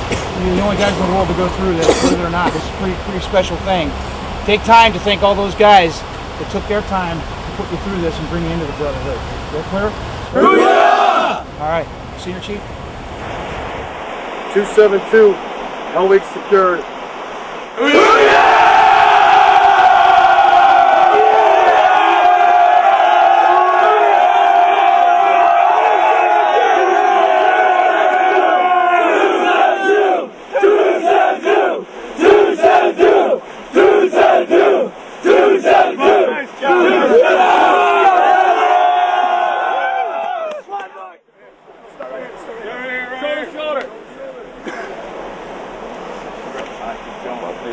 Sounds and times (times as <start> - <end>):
Crowd: 9.8 - 11.8, 17.8 - 47.7
Battle cry: 10.4 - 11.4, 17.8 - 41.2.